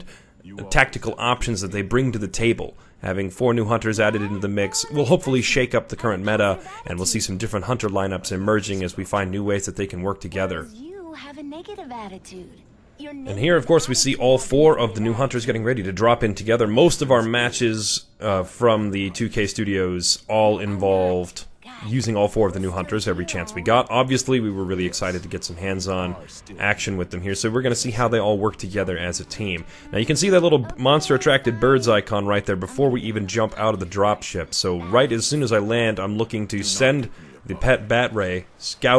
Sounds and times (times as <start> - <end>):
Speech: 0.0 - 38.9.